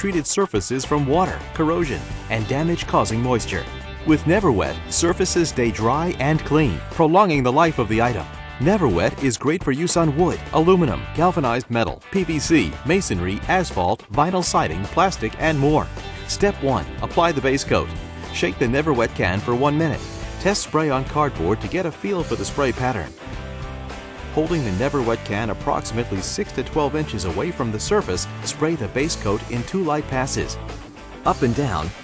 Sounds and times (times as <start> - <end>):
Speech: 0.0 - 23.1, 24.3 - 30.6, 31.2 - 32.0
Music: 0.0 - 32.0.